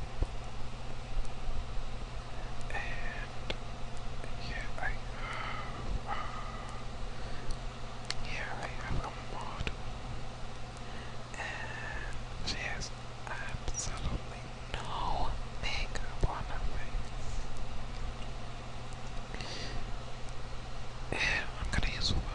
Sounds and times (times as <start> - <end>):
Whispering: 2.7 - 3.4, 4.3 - 5.1, 8.2 - 9.8, 11.4 - 17.1, 21.1 - 22.3.